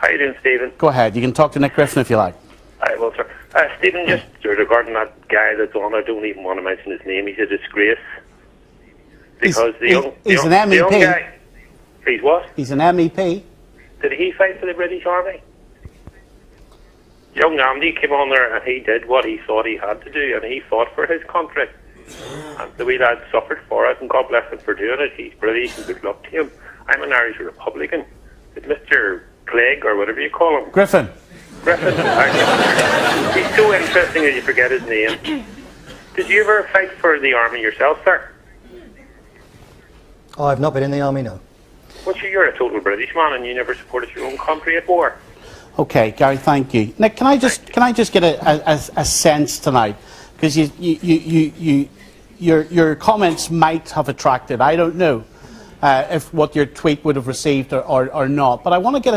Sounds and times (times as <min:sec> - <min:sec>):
Speech: 0:00.0 - 0:08.3, 0:09.4 - 0:11.4, 0:17.4 - 0:21.8, 0:22.6 - 0:35.4, 0:36.2 - 0:39.4, 0:42.1 - 0:45.2, 0:45.8 - 0:59.1.